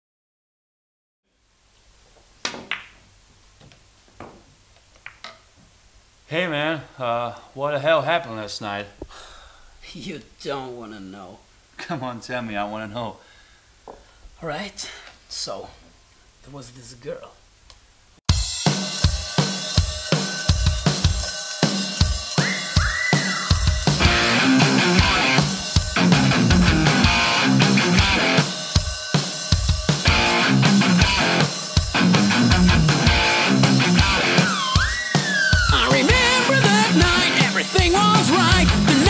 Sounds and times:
Music: 0:18.3 - 0:39.0.

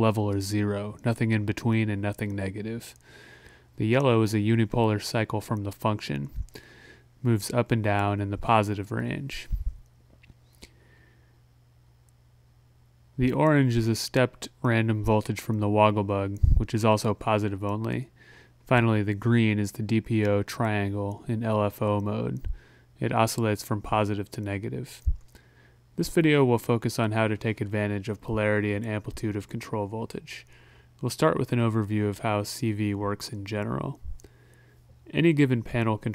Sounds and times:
Speech: 0:00.0 - 0:03.0, 0:03.8 - 0:06.5, 0:07.2 - 0:09.7, 0:13.2 - 0:18.1, 0:18.7 - 0:25.2, 0:26.0 - 0:34.1, 0:35.0 - 0:36.1.

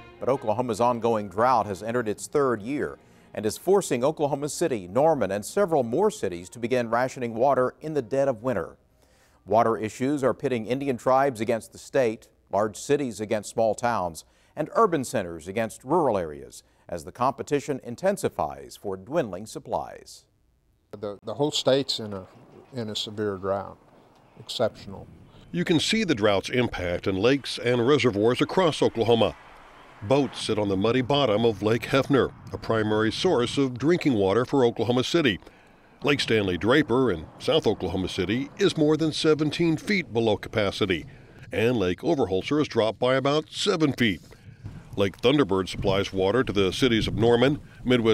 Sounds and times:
Speech: 0:00.2 - 0:08.8, 0:09.5 - 0:20.3, 0:21.0 - 0:23.8, 0:24.4 - 0:29.4, 0:30.0 - 0:35.4, 0:36.0 - 0:44.2, 0:45.0 - 0:48.1.

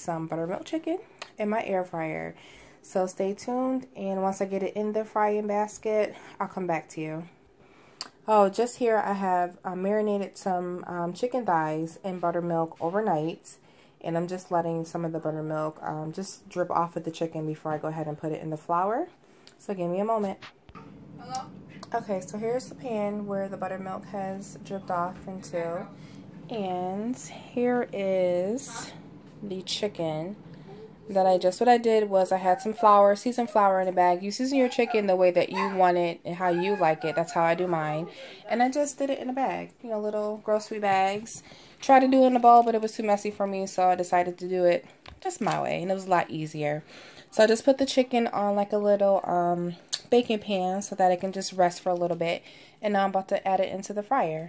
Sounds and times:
Speech: 0:00.0 - 0:07.3, 0:08.2 - 0:20.5, 0:21.2 - 0:54.4.

